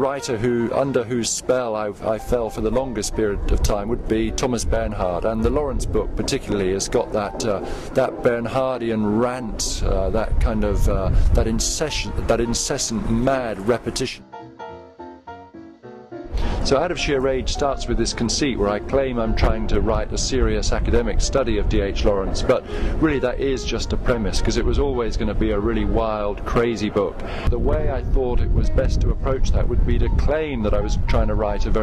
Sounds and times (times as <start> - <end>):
Male speech, man speaking: 0.0 - 14.2, 16.7 - 31.8
Music: 0.0 - 31.8.